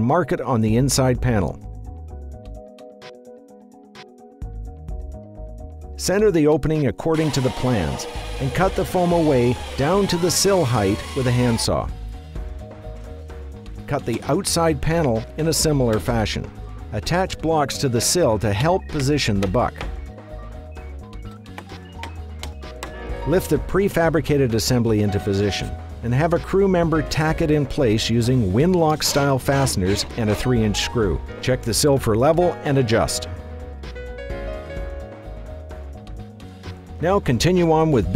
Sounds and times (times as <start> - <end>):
Speech: 0.0 - 1.6, 6.0 - 11.9, 13.9 - 19.8, 23.3 - 33.3, 37.0 - 38.1
Music: 0.0 - 38.1.